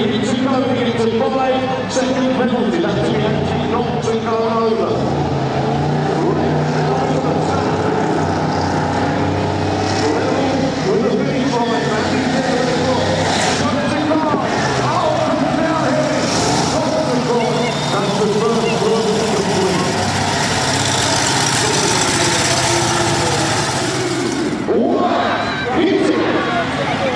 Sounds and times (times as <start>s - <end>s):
Speech: 0.0s - 5.2s, 6.0s - 8.2s, 9.9s - 20.2s, 21.0s - 23.6s, 24.6s - 27.1s
Truck: 0.0s - 27.1s.